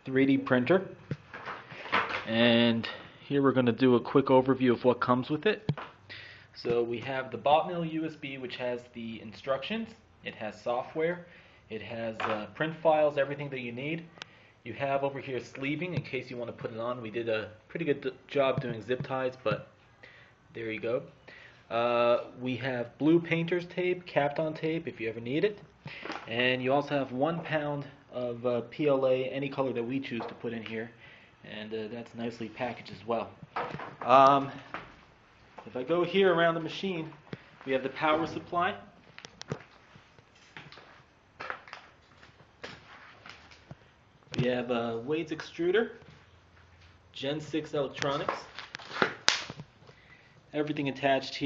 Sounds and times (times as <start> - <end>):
Speech: 0.0 - 1.0, 2.2 - 5.7, 6.6 - 14.1, 14.7 - 19.7, 20.5 - 21.1, 21.7 - 25.6, 26.3 - 33.4, 34.0 - 34.7, 35.6 - 39.0, 44.3 - 46.0, 47.2 - 48.5, 50.5 - 51.4.